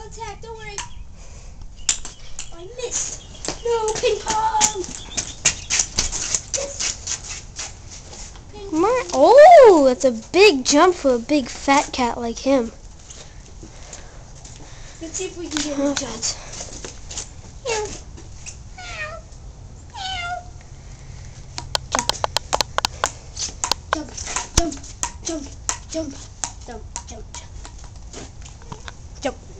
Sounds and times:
Meow: 0:18.8 - 0:19.2, 0:19.9 - 0:20.5.

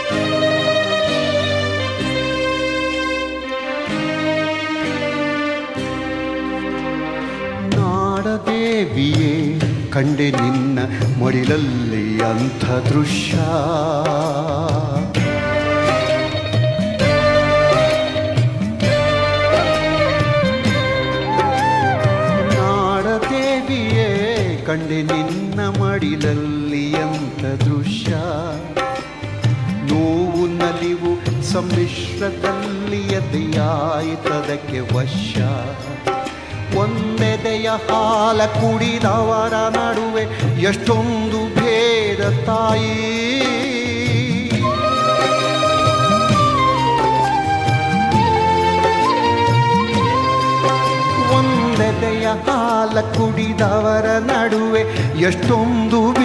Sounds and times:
Folk music: 0:00.0 - 0:56.2
Music of Asia: 0:00.0 - 0:56.2
Song: 0:11.4 - 0:25.6, 0:42.9 - 0:56.2.

